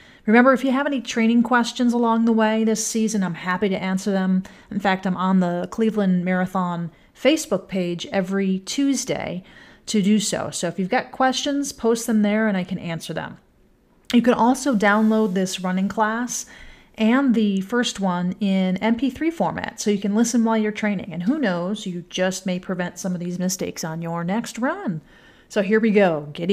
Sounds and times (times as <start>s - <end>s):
Speech: 0.3s - 13.4s, 14.1s - 26.5s.